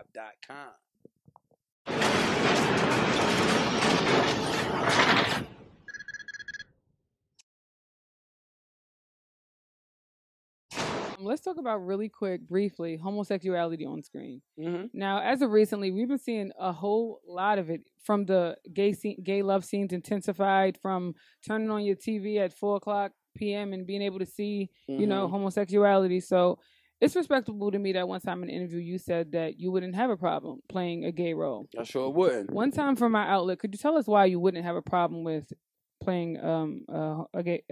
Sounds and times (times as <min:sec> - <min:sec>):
Speech: 0:00.0 - 0:00.8, 0:11.2 - 0:37.7.